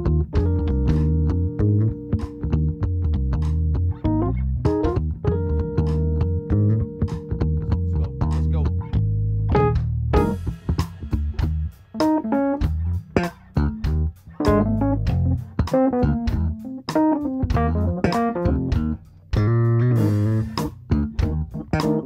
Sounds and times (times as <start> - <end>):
Music: 0.0 - 22.0.